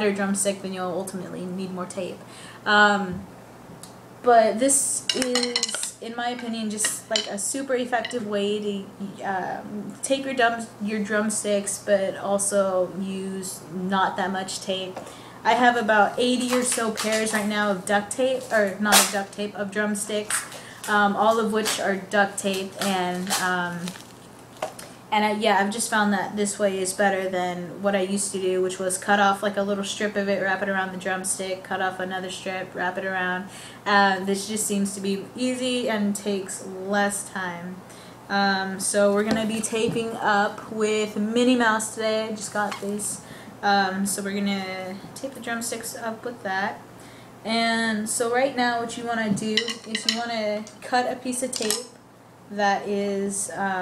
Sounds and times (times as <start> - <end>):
Speech: 0.0 - 3.2, 4.2 - 24.0, 25.1 - 46.8, 47.4 - 53.8.